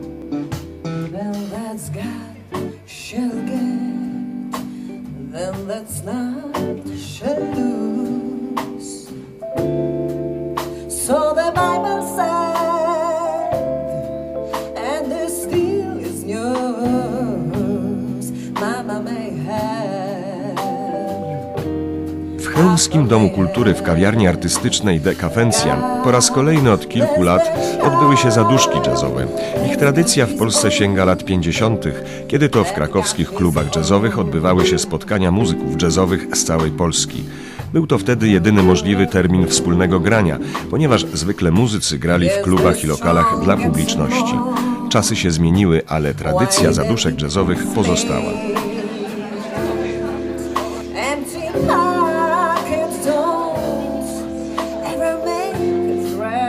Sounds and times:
Music: 0:00.0 - 0:56.4
Speech: 0:22.4 - 0:48.6.

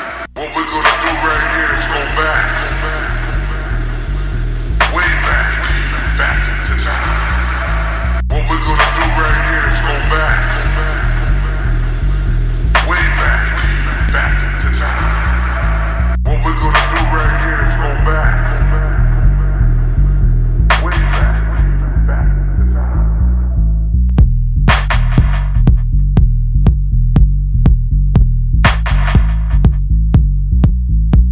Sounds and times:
Music: 0:00.0 - 0:31.3
Speech: 0:00.4 - 0:03.8, 0:04.8 - 0:07.7, 0:08.3 - 0:11.7, 0:12.8 - 0:19.7, 0:20.7 - 0:23.3.

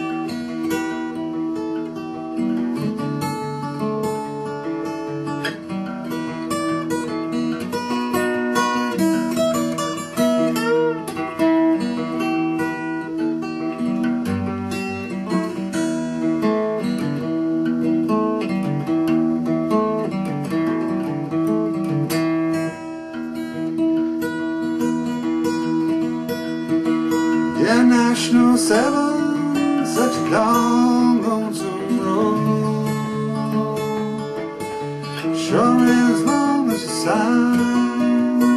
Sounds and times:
Music: 0:00.0 - 0:38.5.

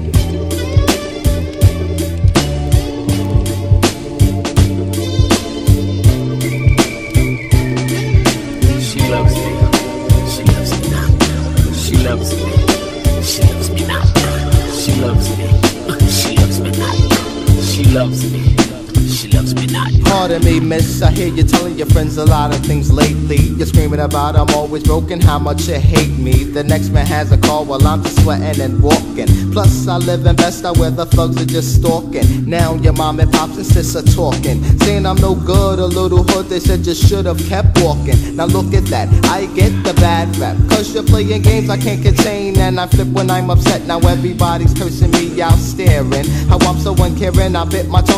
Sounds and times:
Music: 0:00.0 - 0:48.1.

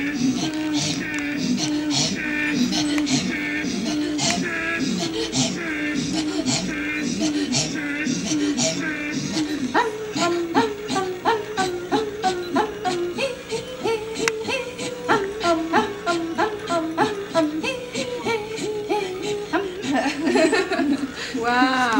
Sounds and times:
Female singing: 0:08.8 - 0:21.9.

